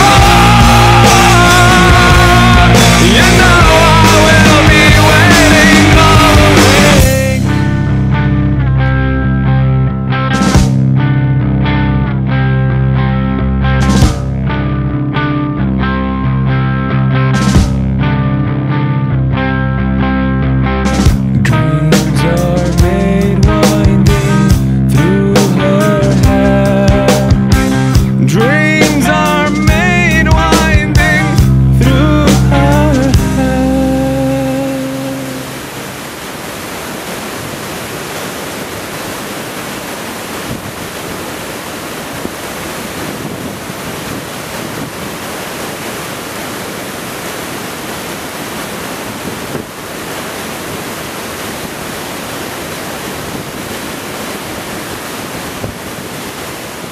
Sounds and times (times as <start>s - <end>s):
Music: 0.0s - 35.6s
Outside, rural or natural: 0.0s - 56.9s.